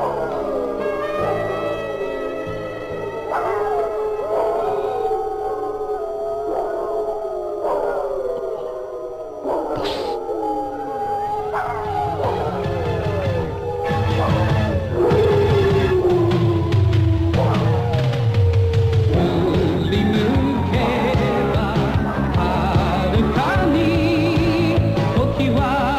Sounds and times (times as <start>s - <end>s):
Music: 0.0s - 8.2s, 9.8s - 25.9s
Howl: 0.0s - 25.9s.